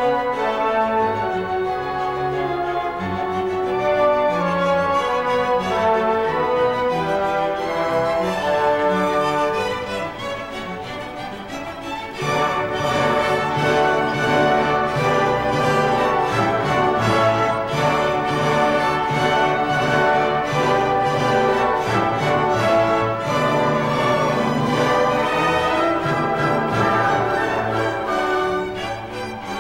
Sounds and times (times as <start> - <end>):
Music: 0.0 - 29.6.